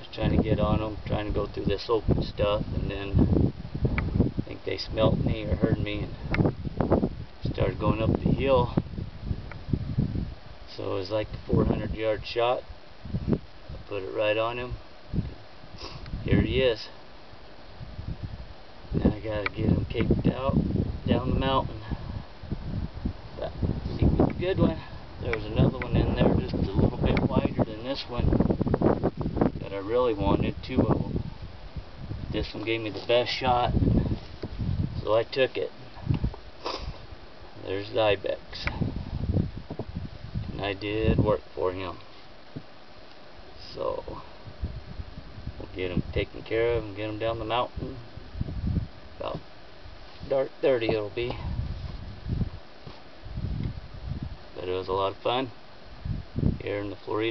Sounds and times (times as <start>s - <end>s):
Speech: 0.0s - 3.2s, 4.4s - 6.2s, 7.4s - 8.8s, 10.7s - 12.6s, 13.8s - 14.8s, 16.2s - 17.0s, 19.0s - 22.0s, 23.4s - 28.3s, 29.6s - 31.2s, 32.3s - 33.8s, 35.0s - 35.8s, 37.6s - 38.8s, 40.5s - 42.0s, 43.6s - 44.3s, 45.6s - 48.0s, 49.2s - 49.4s, 50.2s - 51.5s, 54.6s - 55.6s, 56.6s - 57.3s.